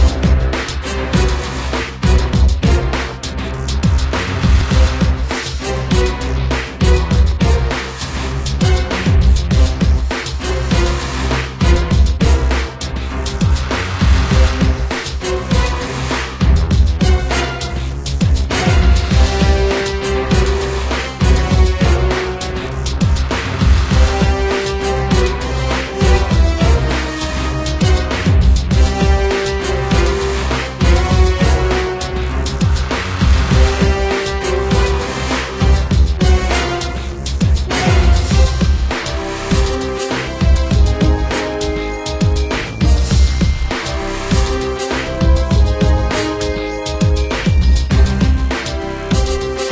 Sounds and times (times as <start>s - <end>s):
Music: 0.0s - 49.7s.